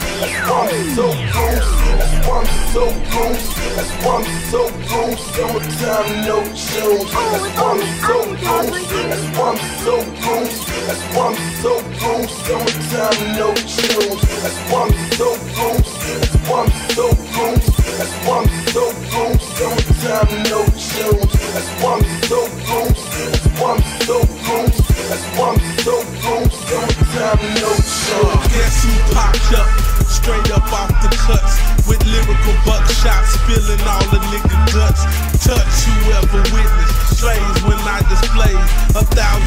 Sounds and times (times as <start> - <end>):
Music: 0.0 - 39.4.